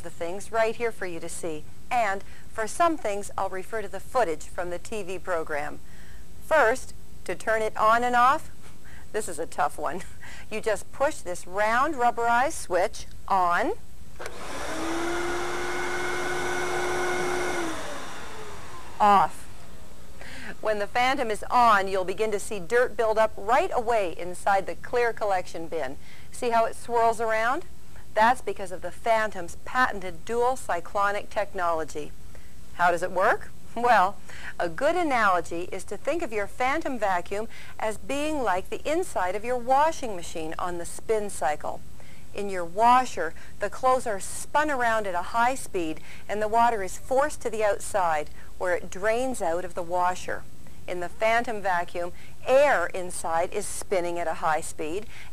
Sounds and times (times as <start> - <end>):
Speech: 0.0 - 5.8, 6.5 - 8.5, 9.2 - 13.8, 19.0 - 19.4, 20.6 - 32.1, 32.8 - 41.8, 42.4 - 55.1.